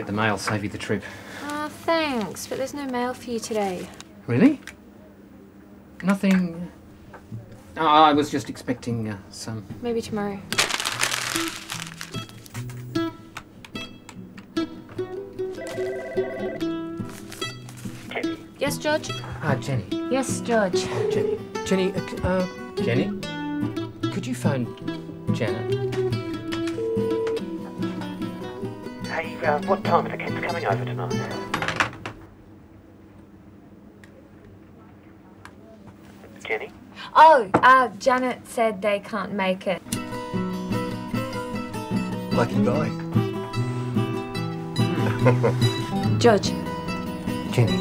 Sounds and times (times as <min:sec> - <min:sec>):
Music: 0:09.7 - 0:31.9, 0:39.8 - 0:47.8.